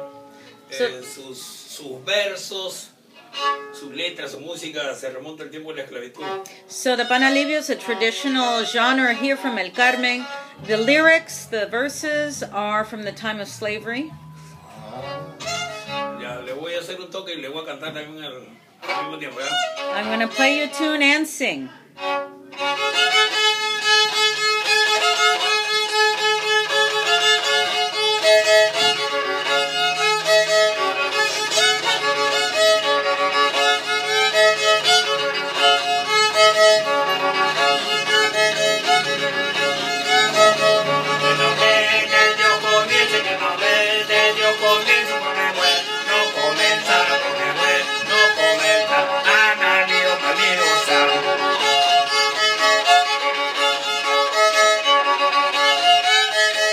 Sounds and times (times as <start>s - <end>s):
Violin, fiddle: 0.0s - 56.7s
Speech: 16.2s - 21.8s.